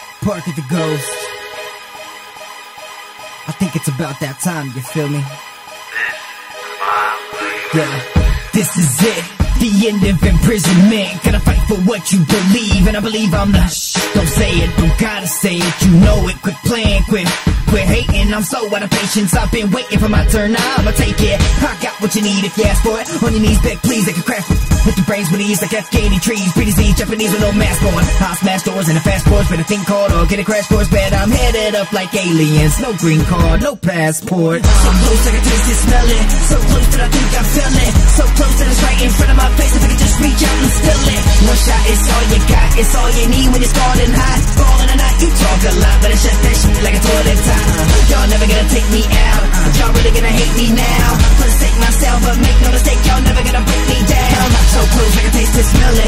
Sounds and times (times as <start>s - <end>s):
Music: 0.0s - 56.0s.